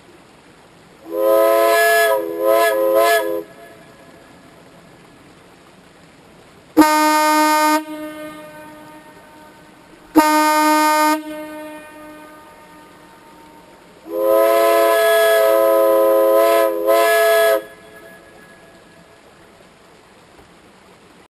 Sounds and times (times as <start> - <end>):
Train horn: 1.1 - 4.0, 6.8 - 18.8.